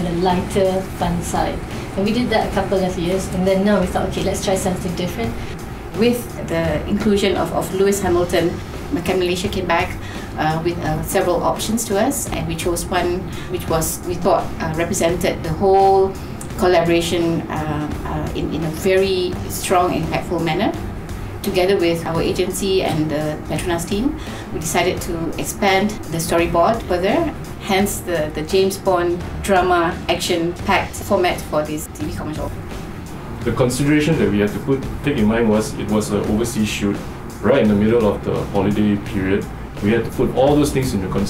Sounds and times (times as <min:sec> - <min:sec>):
Speech: 0:00.0 - 0:05.3, 0:06.0 - 0:20.8, 0:21.5 - 0:32.5, 0:33.5 - 0:41.2
Music: 0:00.0 - 0:41.2.